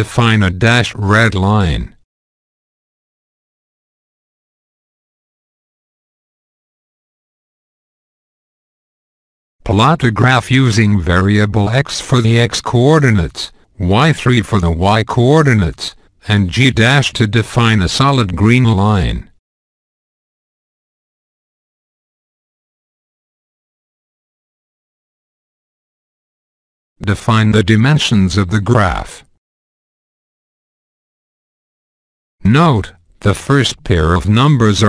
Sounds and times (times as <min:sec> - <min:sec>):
Speech synthesizer: 0:00.0 - 0:02.0, 0:09.7 - 0:19.3, 0:27.0 - 0:29.3, 0:32.5 - 0:34.8.